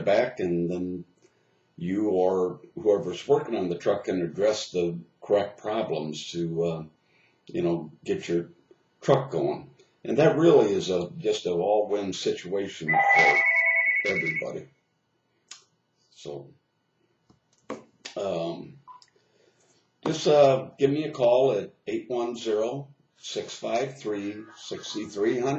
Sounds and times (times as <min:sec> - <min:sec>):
Speech: 0:00.0 - 0:01.0, 0:01.8 - 0:06.9, 0:07.5 - 0:14.6, 0:16.2 - 0:16.5, 0:18.1 - 0:18.8, 0:20.1 - 0:25.5.